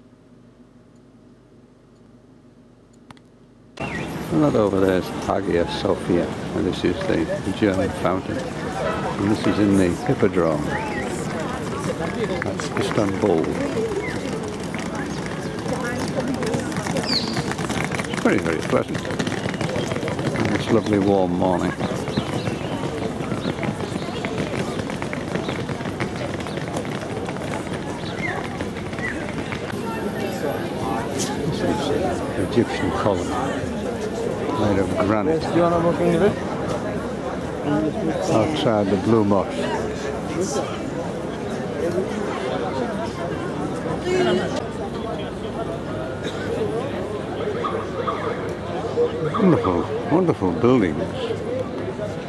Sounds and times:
Speech: 0:04.3 - 0:17.4, 0:18.1 - 0:24.9, 0:28.0 - 0:52.2
Bird: 0:16.9 - 0:29.7.

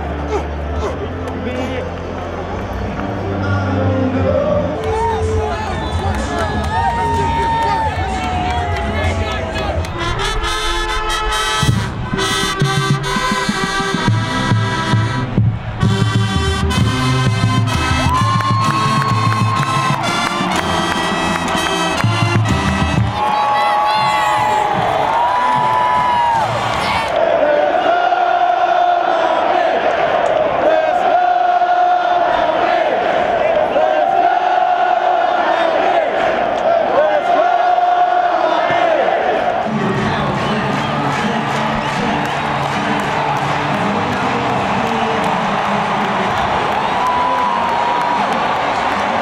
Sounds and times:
Crowd: 0:00.0 - 0:49.2
Cheering: 0:02.1 - 0:11.4, 0:14.0 - 0:49.2.

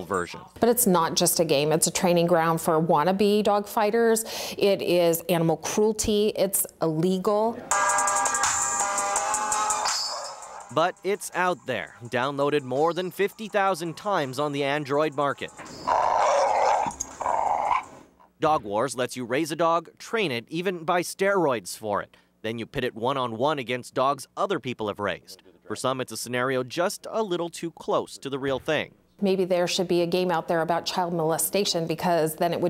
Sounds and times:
Speech: 0:10.8 - 0:15.5, 0:18.4 - 0:32.6.

